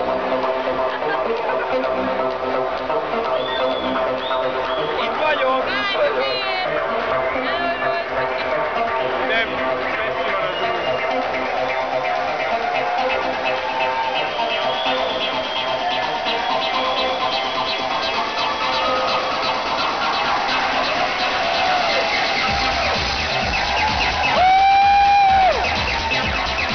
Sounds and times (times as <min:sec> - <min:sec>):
Crowd: 0:00.0 - 0:26.7
Music: 0:00.0 - 0:26.7.